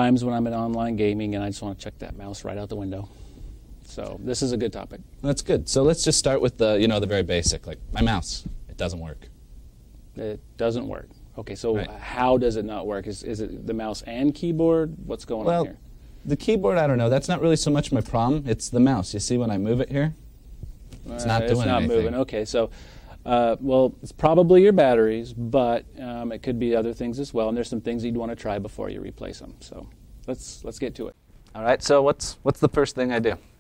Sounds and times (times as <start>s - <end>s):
Speech: 0.0s - 3.1s, 3.9s - 9.3s, 10.2s - 20.2s, 21.0s - 33.5s.